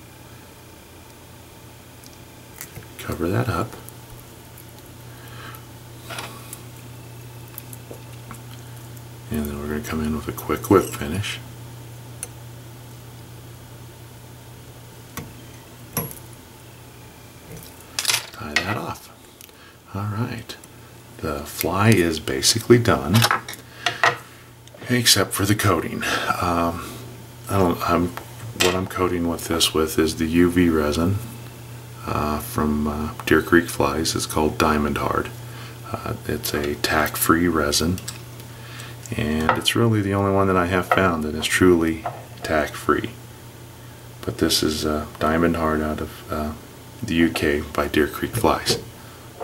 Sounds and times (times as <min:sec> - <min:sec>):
Speech: 0:03.0 - 0:03.8, 0:09.3 - 0:11.5, 0:18.3 - 0:19.2, 0:19.9 - 0:20.6, 0:21.2 - 0:23.4, 0:24.8 - 0:26.8, 0:27.5 - 0:31.3, 0:32.0 - 0:38.1, 0:39.1 - 0:43.2, 0:44.2 - 0:48.9.